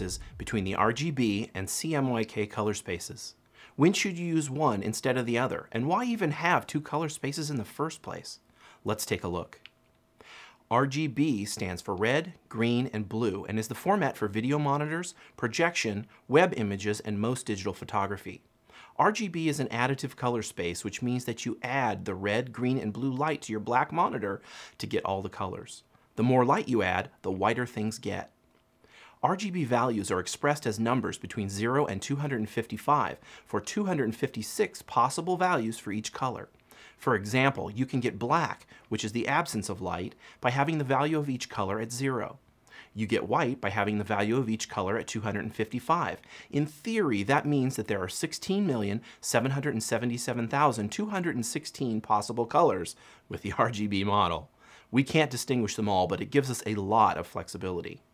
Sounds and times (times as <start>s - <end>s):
Speech: 0.0s - 9.7s, 10.7s - 28.4s, 29.2s - 58.1s.